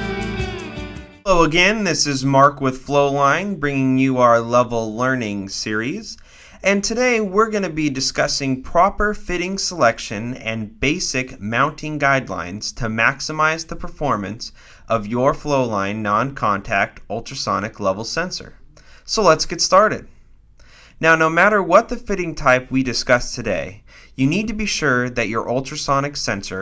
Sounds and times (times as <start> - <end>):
Speech: 1.3 - 20.1, 21.0 - 26.6.